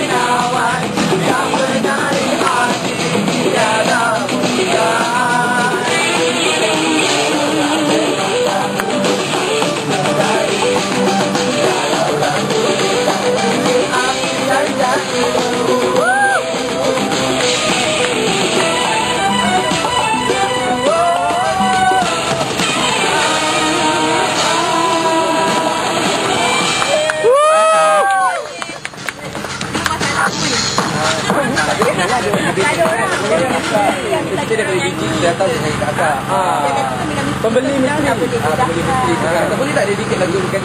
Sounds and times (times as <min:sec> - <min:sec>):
Music: 0:00.0 - 0:40.6
Speech: 0:28.5 - 0:40.6.